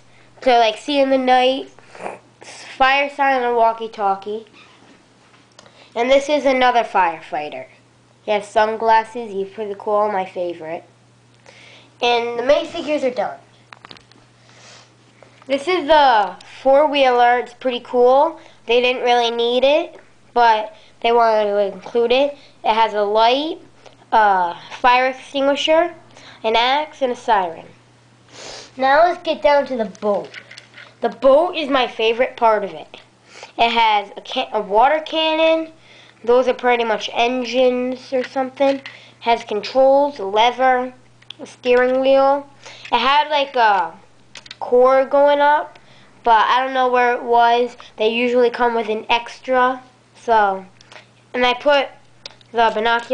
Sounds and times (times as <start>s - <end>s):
Speech: 0.4s - 1.8s, 2.5s - 4.6s, 6.0s - 10.9s, 12.0s - 13.5s, 15.5s - 27.8s, 28.8s - 30.4s, 31.0s - 44.0s, 44.6s - 50.7s, 51.3s - 53.1s.